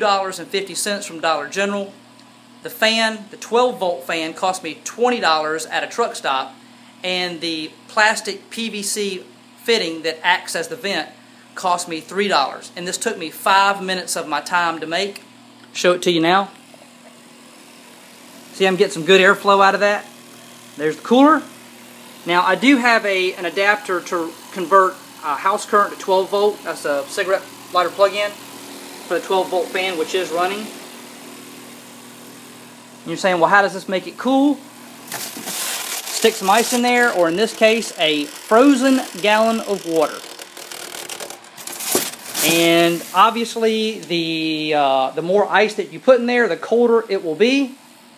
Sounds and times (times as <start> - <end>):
Speech: 0.0 - 2.0, 2.6 - 16.6, 18.5 - 20.1, 20.8 - 21.5, 22.2 - 28.4, 29.1 - 30.8, 33.0 - 34.6, 36.1 - 40.3, 42.4 - 47.8.